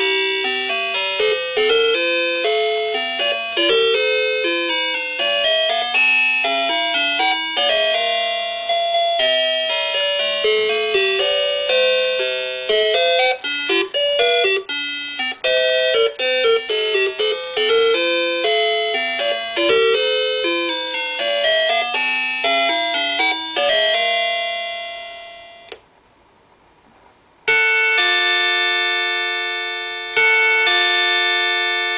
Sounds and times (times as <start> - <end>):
Music: 0.0 - 25.8, 27.5 - 31.9.